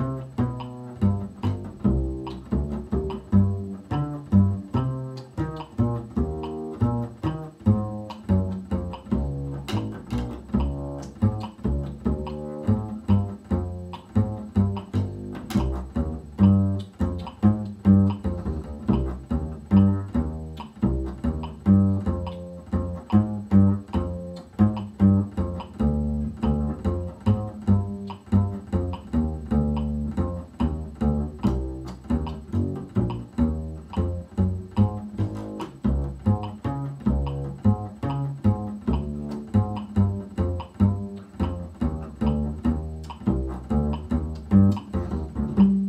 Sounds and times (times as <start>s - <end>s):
Cello: 0.0s - 45.8s
Double bass: 0.0s - 45.8s
Pizzicato: 0.0s - 45.8s.